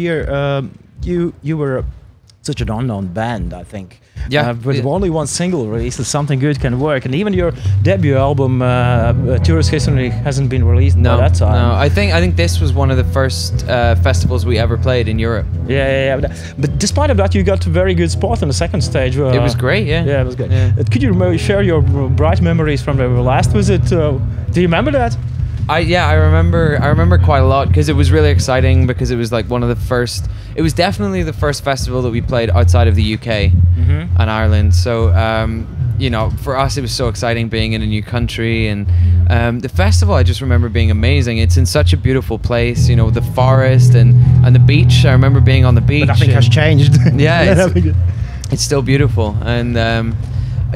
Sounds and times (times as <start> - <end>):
Music: 0.0 - 50.7
Speech: 0.0 - 50.7.